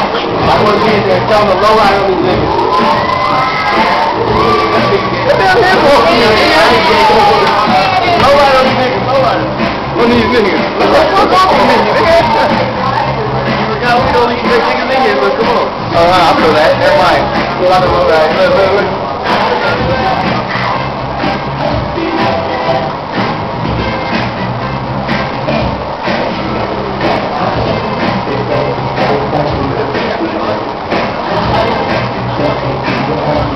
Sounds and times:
Music: 0.0s - 33.5s.

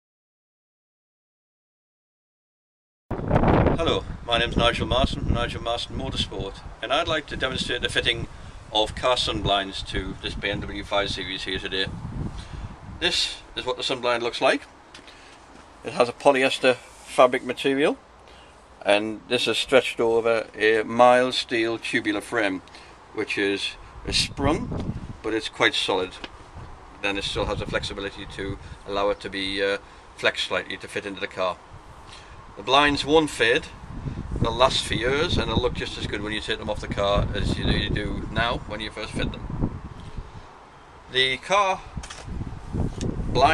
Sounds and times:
Wind noise (microphone): 3.1s - 13.1s, 24.0s - 25.2s, 26.5s - 28.8s, 31.7s - 40.5s, 41.8s - 43.5s.

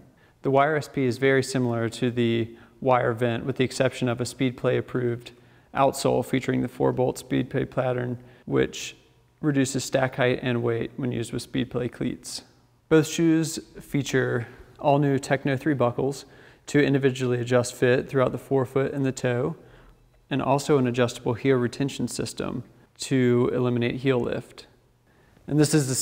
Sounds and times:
Speech: 0.4s - 19.6s, 20.3s - 24.8s, 25.5s - 26.0s.

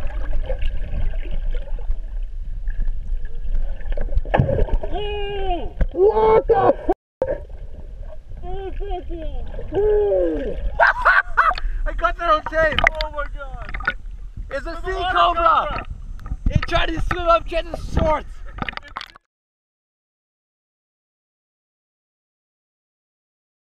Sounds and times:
Outside, rural or natural: 0.0s - 19.3s
Speech: 8.4s - 10.6s, 11.9s - 13.7s, 14.5s - 15.8s, 16.5s - 19.2s.

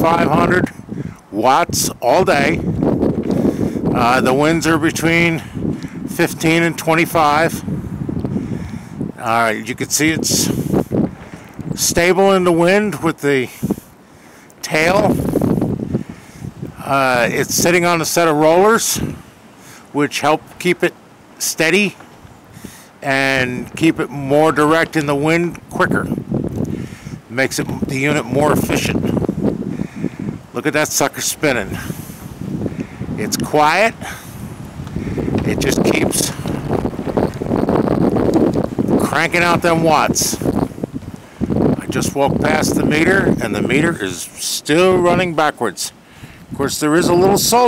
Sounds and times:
Wind noise (microphone): 0.0s - 19.3s, 22.0s - 47.6s.

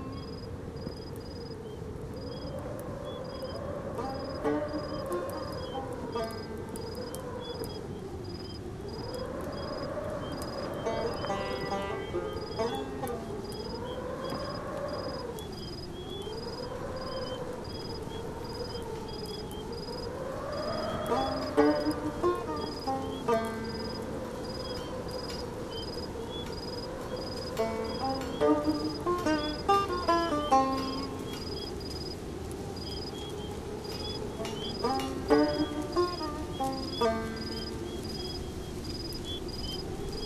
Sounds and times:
Music: 21.0s - 24.0s, 27.6s - 31.4s, 34.4s - 37.8s.

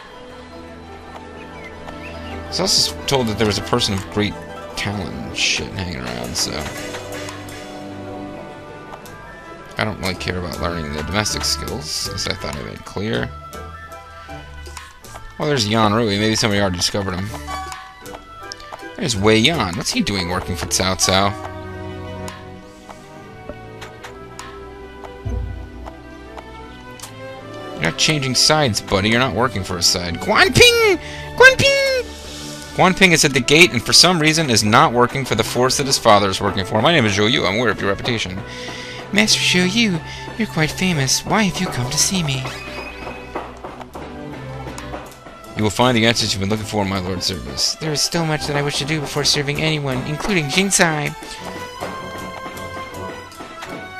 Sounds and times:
Music: 0.0s - 53.9s
Speech: 2.5s - 6.8s, 9.8s - 13.4s, 15.4s - 17.7s, 19.0s - 21.4s, 27.8s - 32.1s, 32.8s - 38.4s, 39.1s - 42.7s, 45.6s - 51.2s.

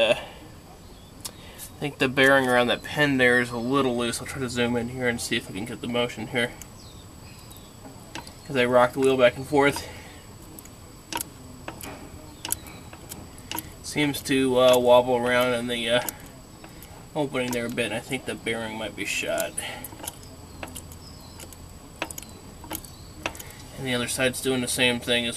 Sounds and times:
Speech: 1.8s - 6.6s, 8.5s - 10.0s, 13.8s - 16.4s, 17.2s - 19.8s, 23.8s - 25.3s.

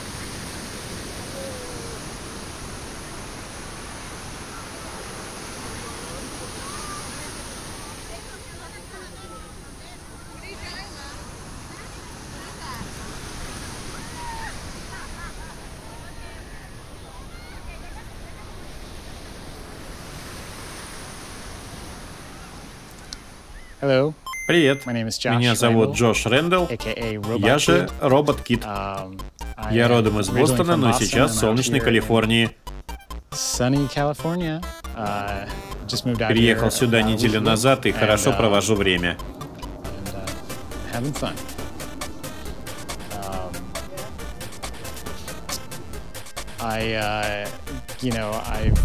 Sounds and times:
Speech: 23.8s - 32.5s, 33.5s - 39.2s, 40.0s - 41.4s, 43.1s - 44.1s, 46.6s - 48.8s
Music: 25.5s - 48.8s.

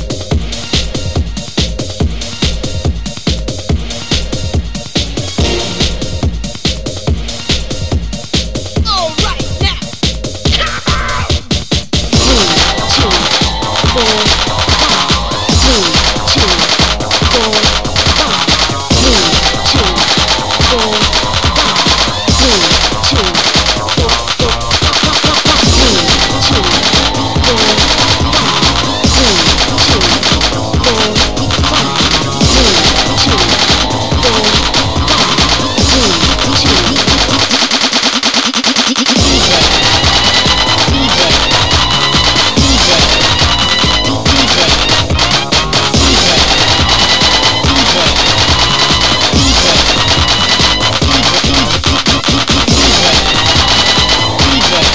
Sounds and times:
Techno: 0.0s - 54.9s.

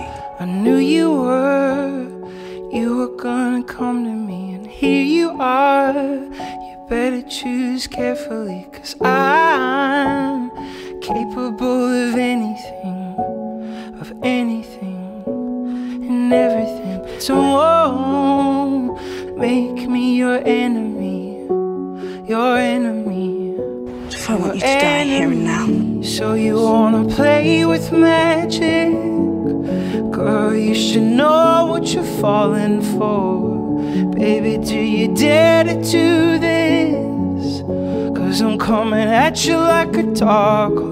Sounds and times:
Music: 0.0s - 40.9s.

